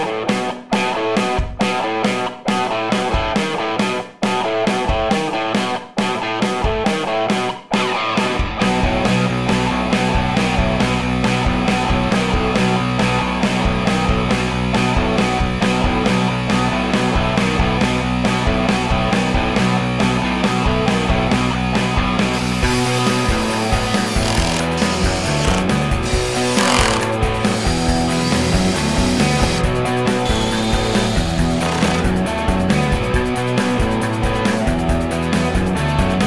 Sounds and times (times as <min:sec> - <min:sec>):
Music: 0:00.0 - 0:36.2.